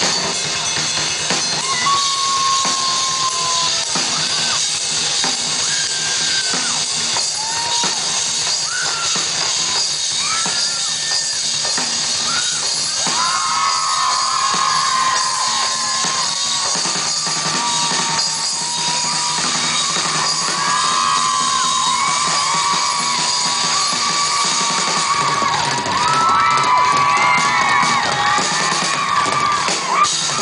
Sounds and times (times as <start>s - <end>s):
Music: 0.0s - 30.4s.